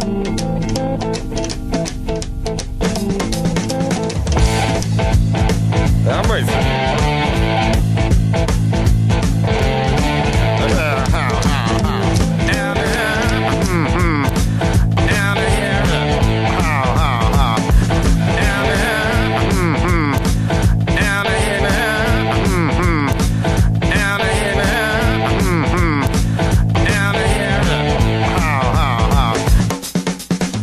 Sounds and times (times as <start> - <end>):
Music: 0.0 - 30.6.